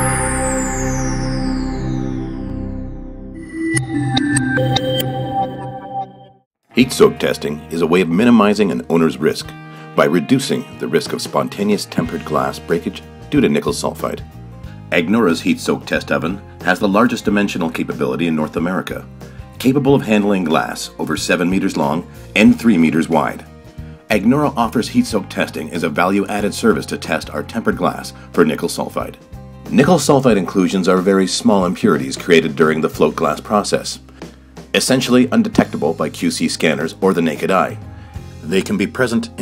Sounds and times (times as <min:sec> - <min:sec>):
Music: 0:00.0 - 0:39.4
Speech: 0:06.7 - 0:14.2, 0:14.9 - 0:23.5, 0:24.1 - 0:34.0, 0:34.8 - 0:37.8, 0:38.4 - 0:39.4.